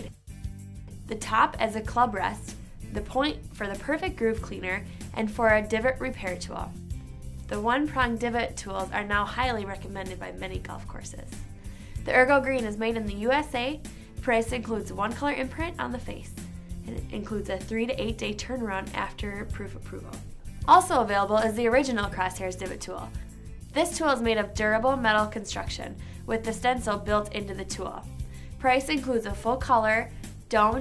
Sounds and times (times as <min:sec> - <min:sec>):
Music: 0:00.0 - 0:30.8
Speech: 0:01.1 - 0:06.7, 0:07.5 - 0:11.3, 0:12.1 - 0:23.2, 0:23.8 - 0:30.8.